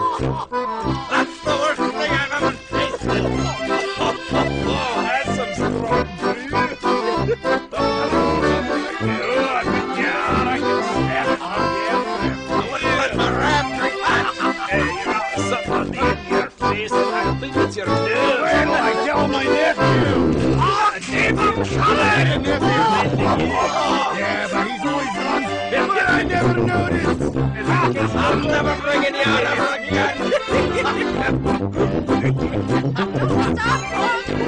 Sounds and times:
Music: 0:00.0 - 0:34.4
Speech: 0:01.0 - 0:08.2, 0:08.9 - 0:34.4.

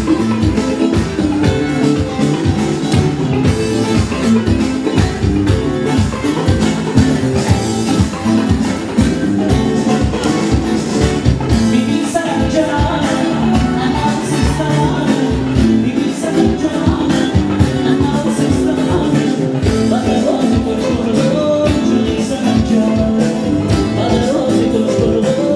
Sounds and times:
Music: 0:00.0 - 0:25.5.

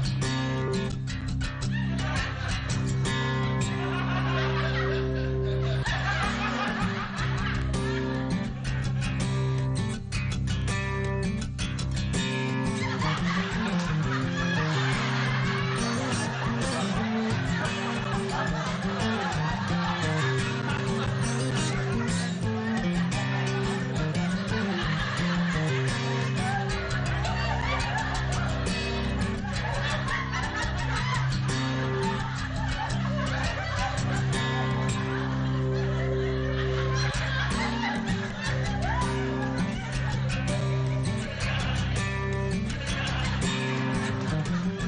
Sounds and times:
Music: 0:00.0 - 0:44.8.

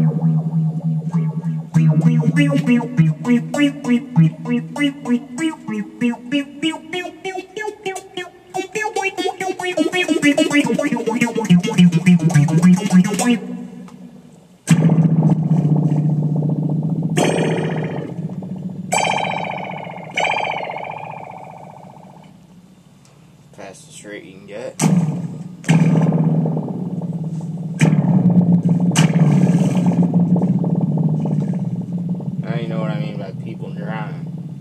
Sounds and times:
Guitar: 0:00.0 - 0:22.5, 0:24.8 - 0:34.6
Effects unit: 0:00.0 - 0:23.1, 0:24.8 - 0:34.6.

